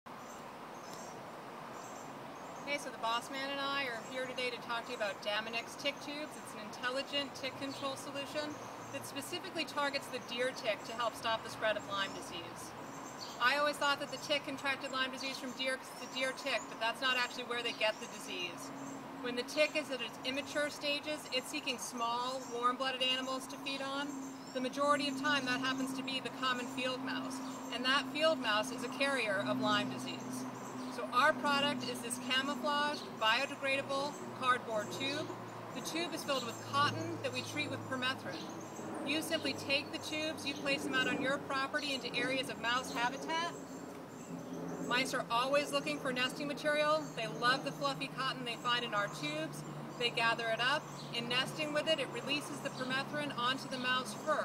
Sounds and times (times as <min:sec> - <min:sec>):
Speech: 0:02.6 - 0:12.7, 0:13.4 - 0:38.5, 0:39.1 - 0:43.6, 0:44.9 - 0:54.4.